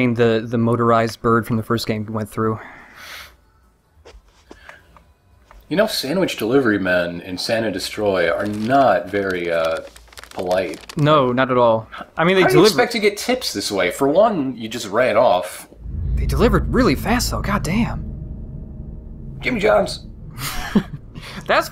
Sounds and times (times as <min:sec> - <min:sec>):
Speech: 0:00.0 - 0:02.6, 0:05.7 - 0:18.0.